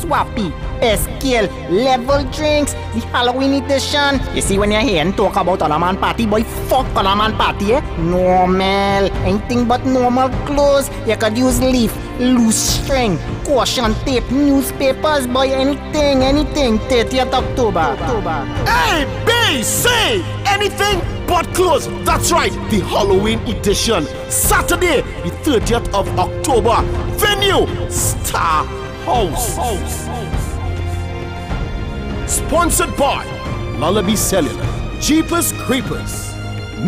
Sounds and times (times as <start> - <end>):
Speech: 0.0 - 30.6
Music: 0.0 - 36.8.